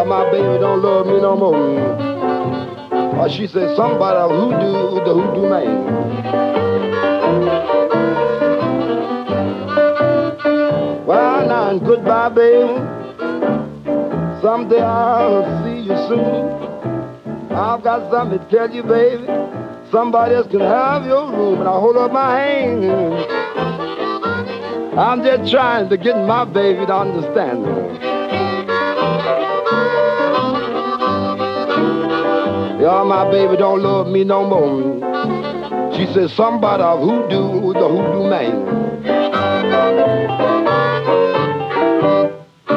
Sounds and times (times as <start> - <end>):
Accordion: 0.0 - 42.7.